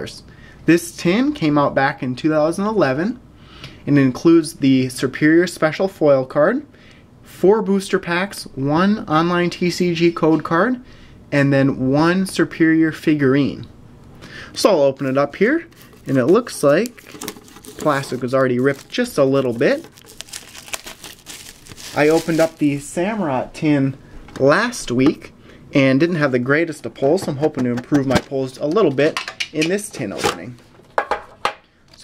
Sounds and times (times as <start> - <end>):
Speech: 0.0 - 3.2, 3.8 - 6.7, 7.3 - 13.7, 14.6 - 17.0, 17.8 - 19.9, 21.9 - 30.6
Inside, small room: 0.0 - 32.0
Crumpling, crinkling: 15.8 - 22.8.